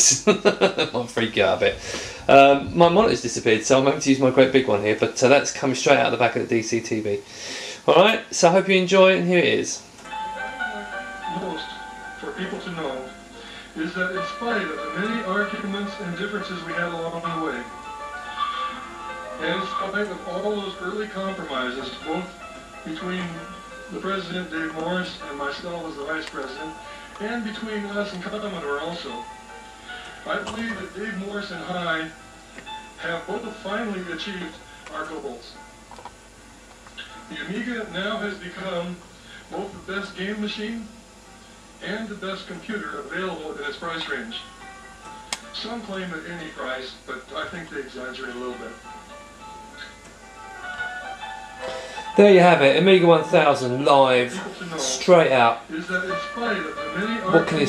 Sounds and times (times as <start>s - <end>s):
Speech: 0.0s - 7.2s, 7.8s - 9.8s, 10.5s - 13.2s, 13.8s - 17.7s, 19.4s - 22.3s, 22.9s - 29.2s, 30.3s - 32.1s, 33.0s - 35.6s, 37.3s - 40.9s, 41.8s - 44.5s, 45.6s - 48.8s, 52.2s - 57.6s
Music: 0.0s - 57.6s
Television: 0.0s - 57.6s.